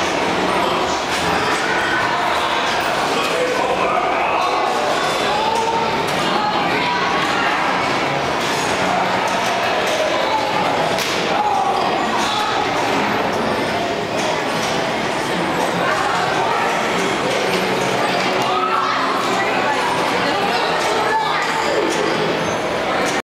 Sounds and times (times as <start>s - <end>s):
Speech: 0.0s - 14.5s, 15.3s - 23.2s.